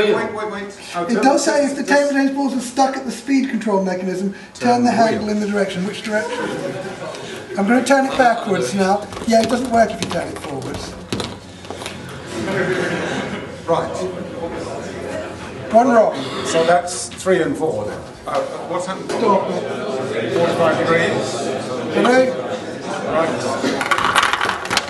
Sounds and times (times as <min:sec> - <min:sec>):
Speech: 0:00.0 - 0:11.0.